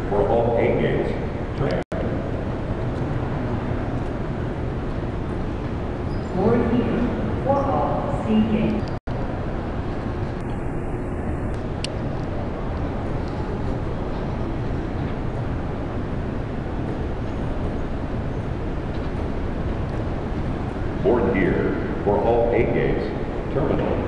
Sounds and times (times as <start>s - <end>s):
Speech: 0.1s - 1.8s, 6.3s - 8.8s, 21.0s - 24.0s.